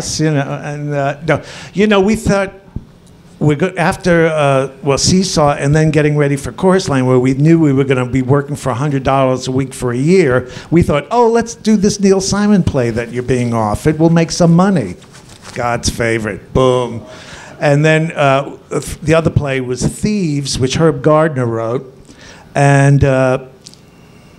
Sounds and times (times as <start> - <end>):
Speech: 0.0 - 2.6, 3.4 - 21.9, 22.6 - 23.6.